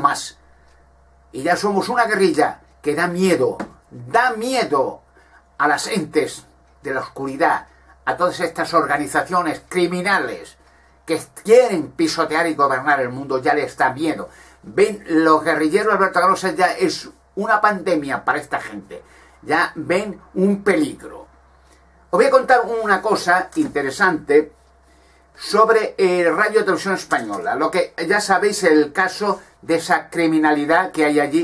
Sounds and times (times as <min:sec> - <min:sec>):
Speech: 0:00.0 - 0:00.4, 0:01.4 - 0:05.0, 0:05.6 - 0:21.3, 0:22.1 - 0:24.6, 0:25.4 - 0:31.4.